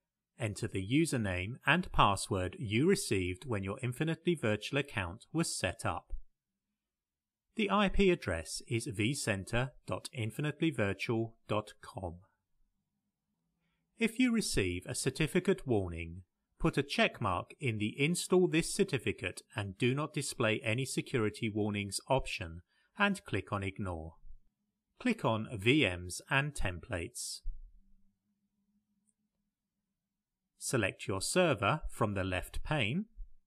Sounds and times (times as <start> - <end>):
Speech: 0.4 - 6.2, 7.6 - 12.2, 14.0 - 24.2, 25.0 - 27.5, 30.6 - 33.2.